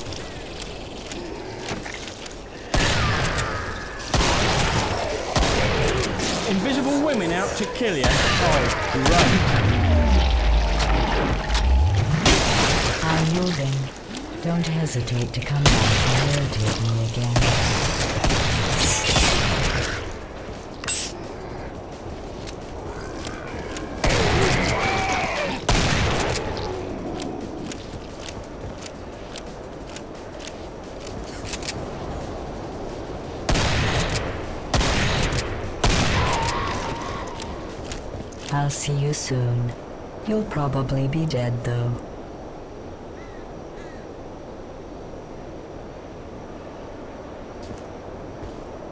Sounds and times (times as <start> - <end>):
Speech: 13.0 - 17.4, 38.5 - 42.0.